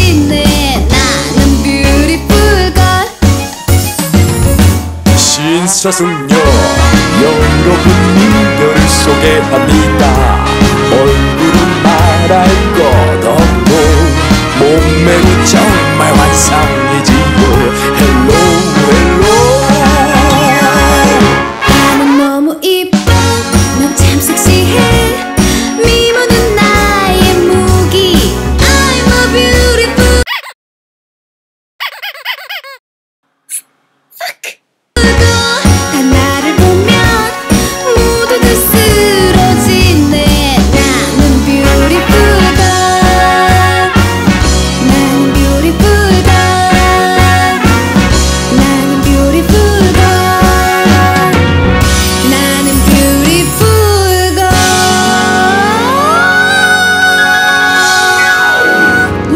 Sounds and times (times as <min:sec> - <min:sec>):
Music: 0:00.0 - 0:30.3, 0:35.0 - 0:59.3.